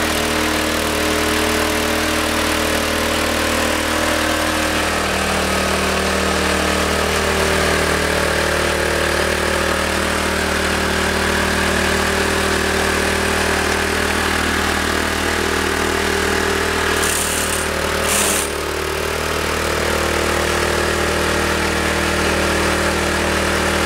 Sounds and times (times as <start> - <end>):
Idling: 0.0 - 22.0
Medium engine (mid frequency): 0.0 - 23.8.